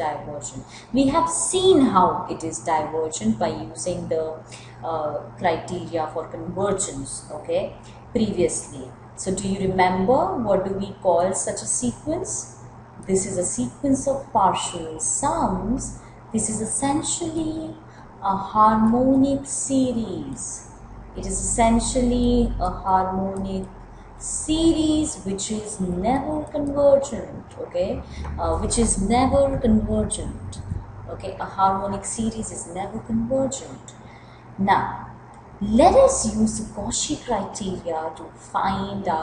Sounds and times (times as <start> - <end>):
Speech: 0.0 - 34.0, 34.6 - 39.2.